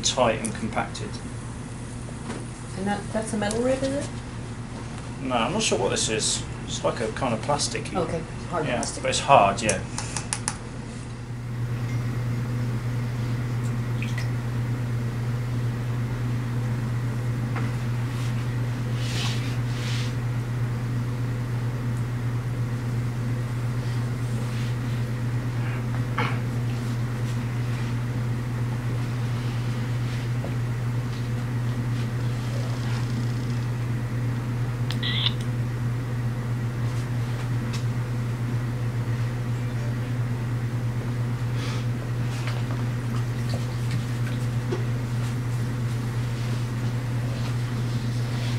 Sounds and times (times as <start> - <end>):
Speech: 0.0 - 1.2, 2.7 - 4.1, 5.2 - 9.9.